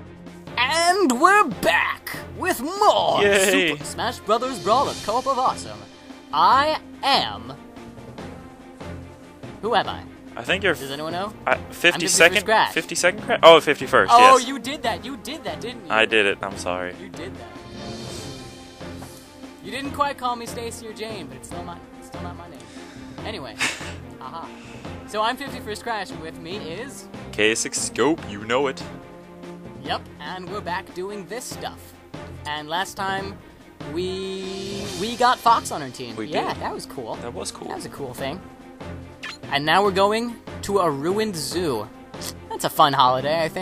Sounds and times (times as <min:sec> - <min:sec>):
Music: 0:00.0 - 0:43.6
Speech: 0:00.6 - 0:05.8, 0:09.6 - 0:17.3, 0:25.1 - 0:28.8, 0:32.5 - 0:38.4, 0:39.5 - 0:41.9, 0:42.5 - 0:43.6.